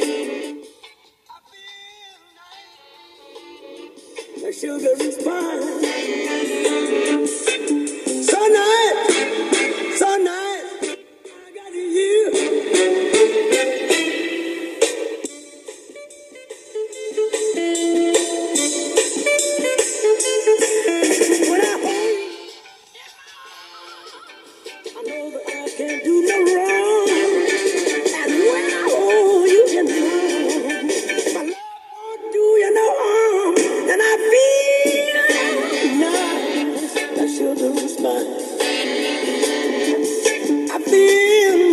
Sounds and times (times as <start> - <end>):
Music: 0.0 - 41.7
Synthetic singing: 1.3 - 3.6, 4.4 - 6.0, 8.3 - 9.1, 11.3 - 12.6, 21.4 - 24.4, 25.0 - 38.5, 40.7 - 41.7.